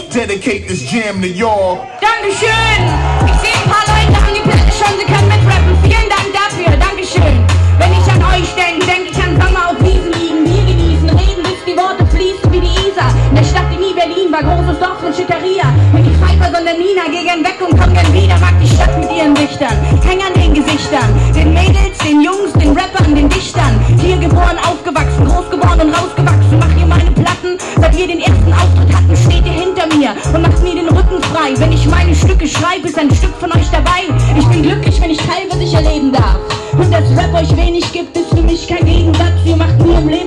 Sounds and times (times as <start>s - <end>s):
Music: 0.0s - 40.2s.